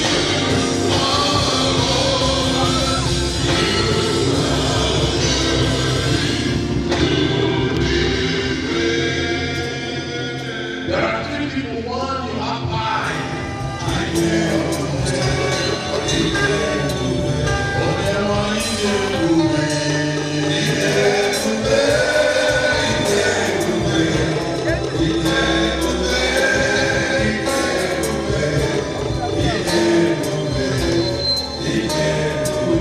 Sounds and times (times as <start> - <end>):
Choir: 0.0 - 32.8
Crowd: 0.0 - 32.8
Gospel music: 0.0 - 32.8.